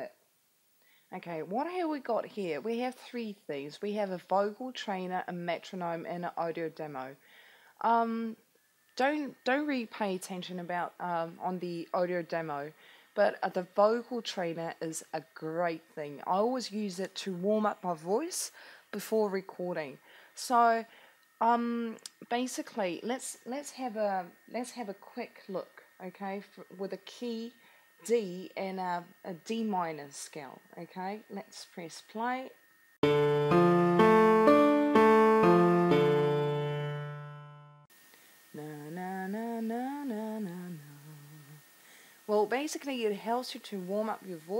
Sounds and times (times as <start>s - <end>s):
Speech: 0.0s - 0.2s, 1.1s - 7.2s, 7.8s - 8.4s, 9.0s - 32.6s, 42.3s - 44.5s.